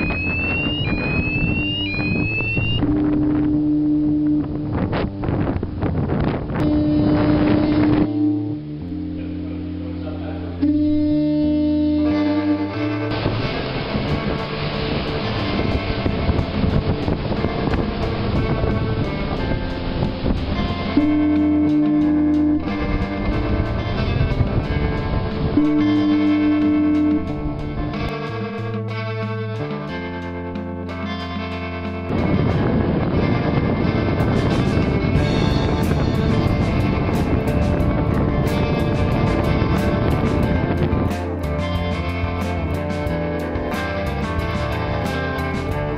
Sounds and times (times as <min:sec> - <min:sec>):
Wind noise (microphone): 0:00.0 - 0:08.6, 0:11.4 - 0:28.5, 0:32.1 - 0:45.9
Ship: 0:00.0 - 0:28.4, 0:31.2 - 0:45.9.